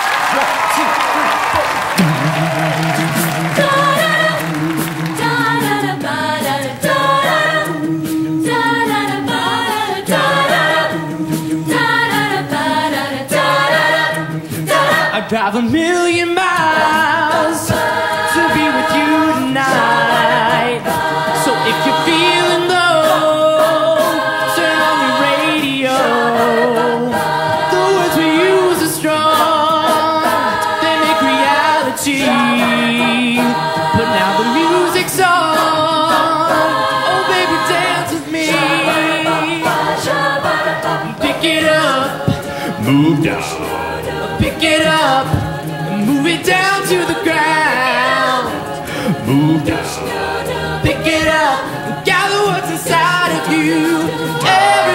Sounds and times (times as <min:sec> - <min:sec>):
Inside, large room or hall: 0:00.0 - 0:54.9
Music: 0:00.0 - 0:54.9
Singing: 0:00.0 - 0:54.9.